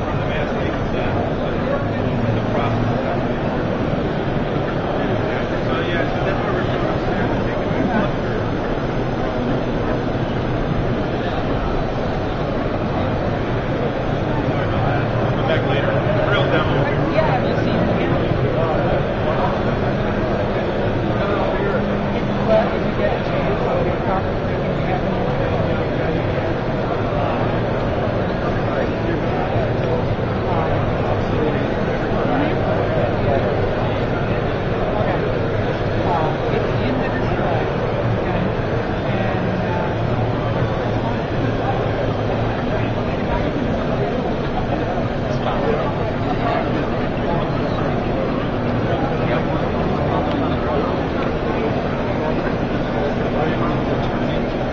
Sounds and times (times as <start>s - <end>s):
Speech: 0.0s - 54.7s.